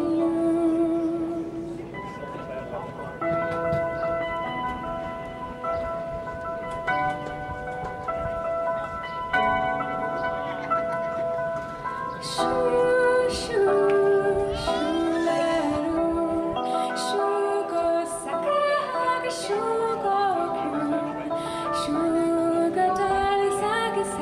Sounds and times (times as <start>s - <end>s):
Music: 0.0s - 24.2s.